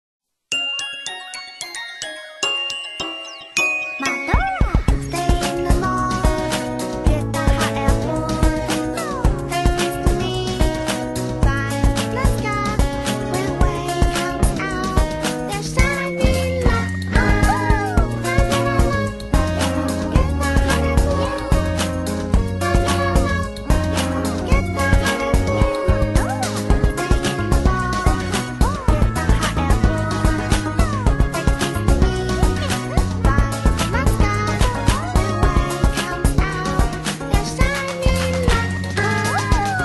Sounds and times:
Theme music: 0:00.5 - 0:07.0, 0:15.8 - 0:35.9.

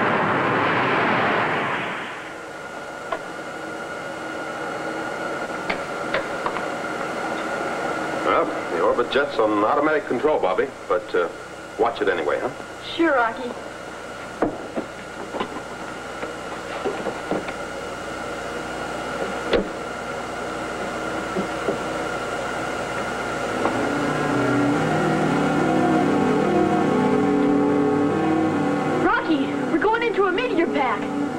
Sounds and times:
Speech: 0:08.2 - 0:13.6, 0:29.0 - 0:31.1.

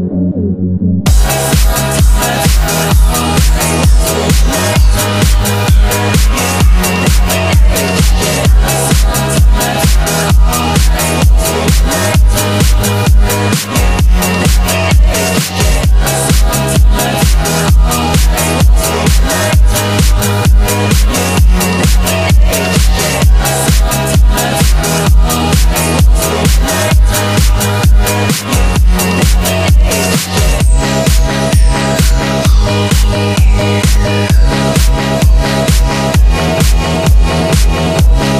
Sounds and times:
Rock music: 0:01.1 - 0:38.3.

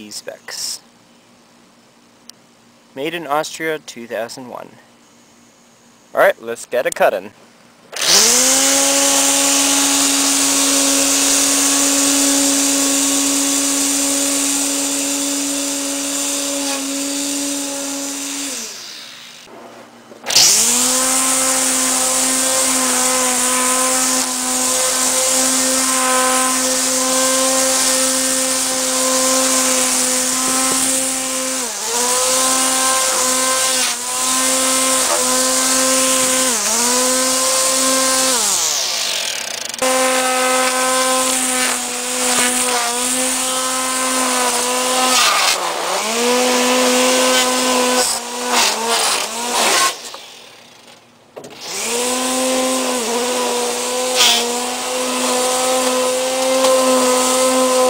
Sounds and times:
Lawn mower: 0:07.9 - 0:19.5, 0:20.2 - 0:57.8.

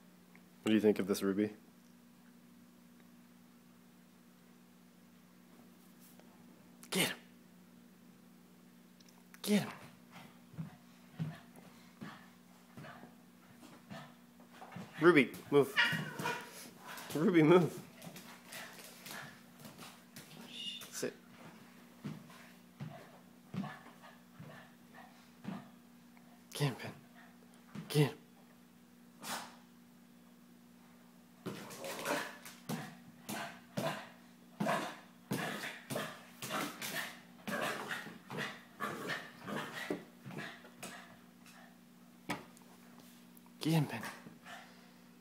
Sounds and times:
Speech: 0:00.7 - 0:01.6, 0:06.9 - 0:07.2, 0:09.4 - 0:09.8, 0:15.0 - 0:15.8, 0:17.1 - 0:17.8, 0:26.5 - 0:27.0, 0:27.8 - 0:28.2, 0:43.6 - 0:44.2.

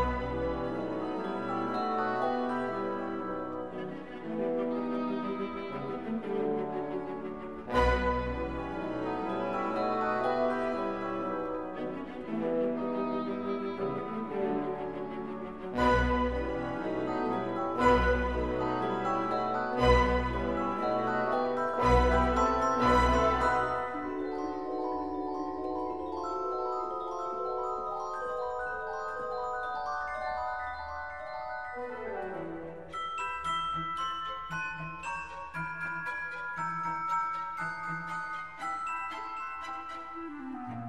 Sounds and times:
Marimba, xylophone: 0:00.0 - 0:05.6, 0:06.2 - 0:40.8
Glockenspiel: 0:00.0 - 0:40.8.

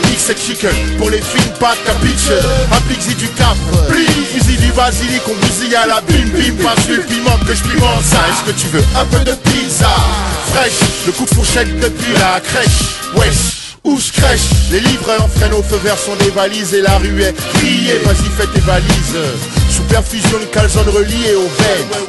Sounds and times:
Music: 0:00.0 - 0:22.0.

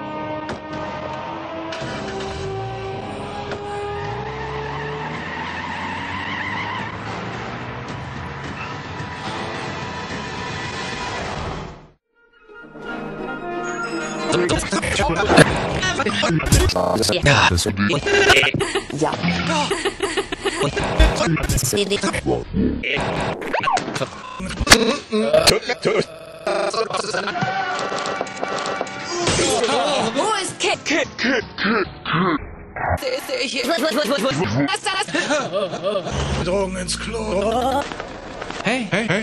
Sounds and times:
Sound effect: 0:20.6 - 0:24.9, 0:31.5 - 0:33.2.

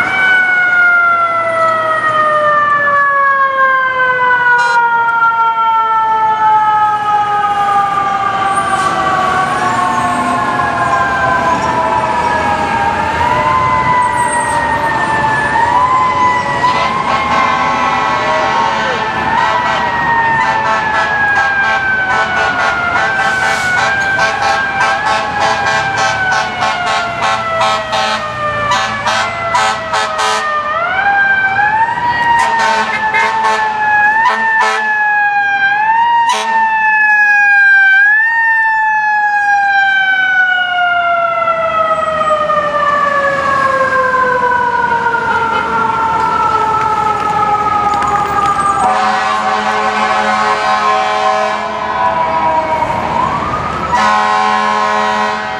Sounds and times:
Fire engine, fire truck (siren): 0:00.0 - 0:55.6.

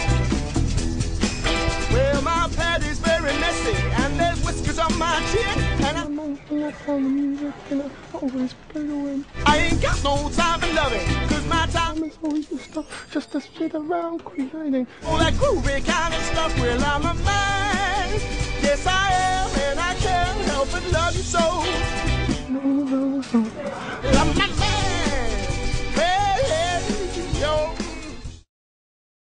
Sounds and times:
Music: 0:00.0 - 0:06.1, 0:09.2 - 0:12.8, 0:15.0 - 0:28.5.

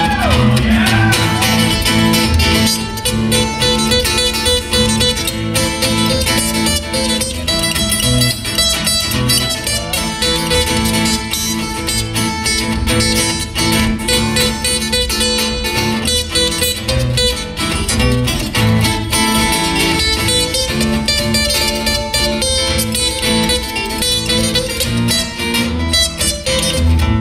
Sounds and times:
Guitar: 0:00.0 - 0:27.2.

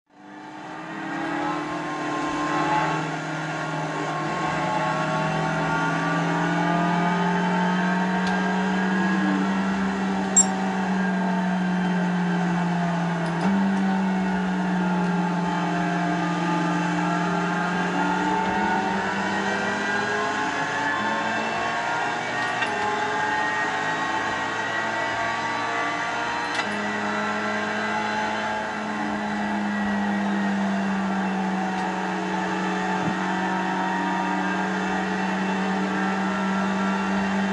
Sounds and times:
Car: 0:00.1 - 0:37.5.

